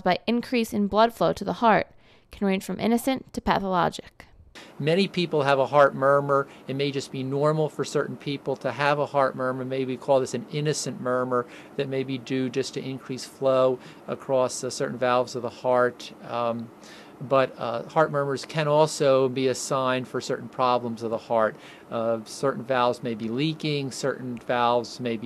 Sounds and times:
Speech: 0.0 - 25.2.

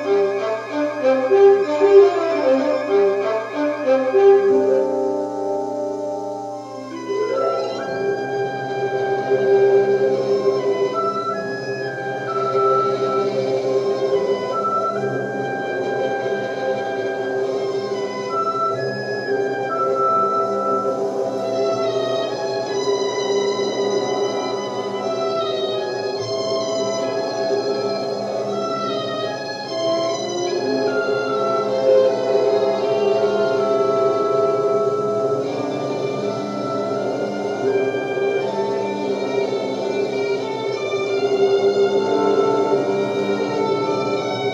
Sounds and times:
Sad music: 0.0 - 44.5.

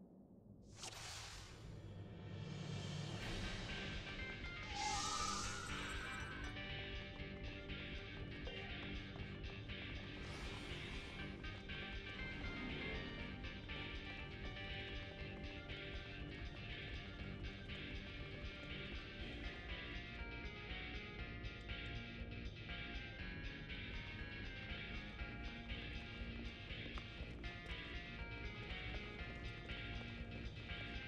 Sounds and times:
Music: 0.5 - 31.0.

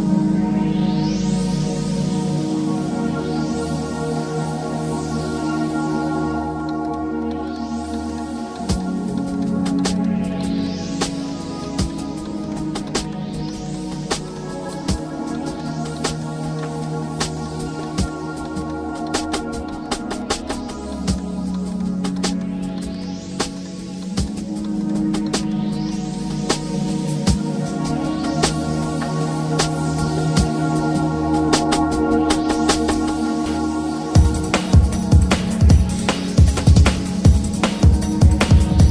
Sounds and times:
Music: 0.0 - 38.9.

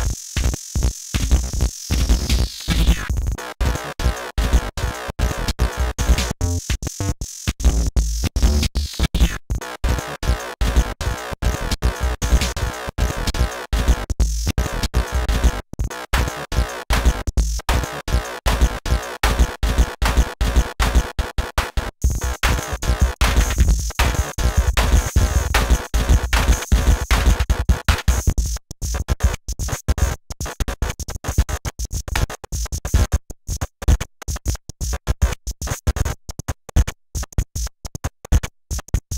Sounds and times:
Electronic music: 3.8 - 6.8, 7.7 - 15.6, 16.2 - 28.2.

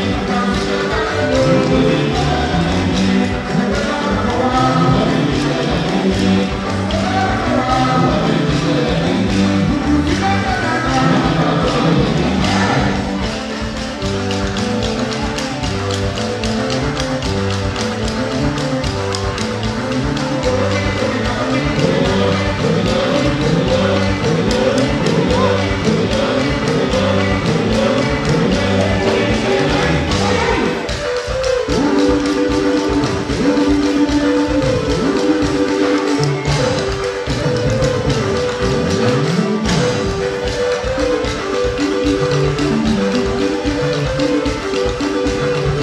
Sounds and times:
Independent music: 0.0 - 45.8.

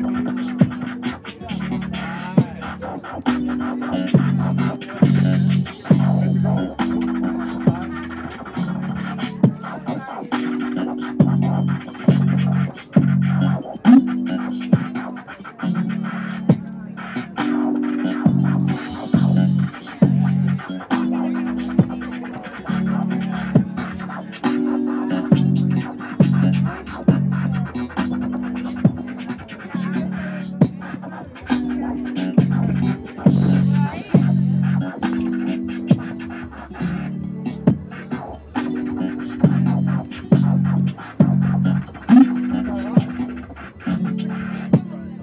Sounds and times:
Electronic music: 0.0 - 45.2
Hip hop music: 0.0 - 45.2
Scratching (performance technique): 0.0 - 45.2.

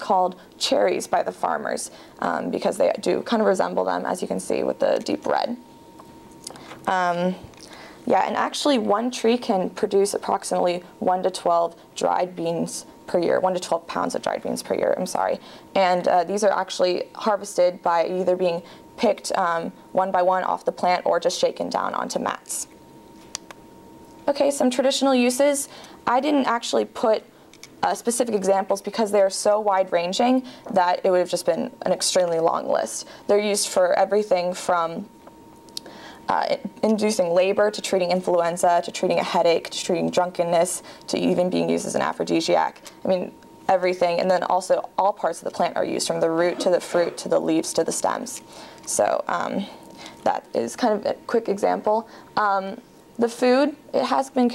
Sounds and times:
Speech: 0.0 - 5.6, 6.9 - 7.5, 8.1 - 22.7, 24.3 - 27.2, 27.8 - 35.1, 36.3 - 54.5.

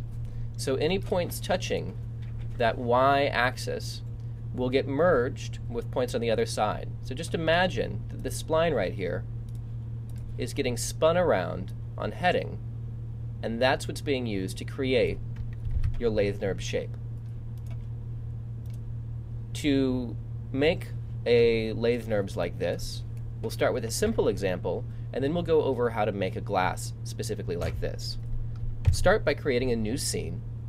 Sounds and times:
Speech: 0.6 - 2.0, 2.6 - 4.0, 4.6 - 9.2, 10.4 - 12.6, 13.4 - 15.2, 16.0 - 17.0, 19.6 - 28.2, 28.9 - 30.4.

